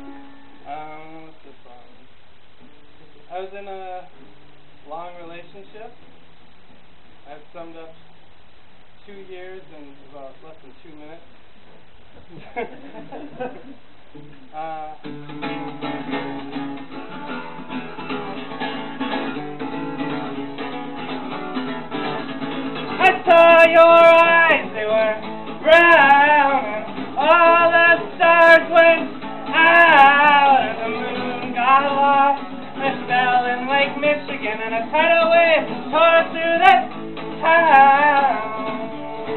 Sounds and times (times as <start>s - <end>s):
Music: 0.0s - 0.8s, 14.2s - 39.3s
Male singing: 23.0s - 39.3s.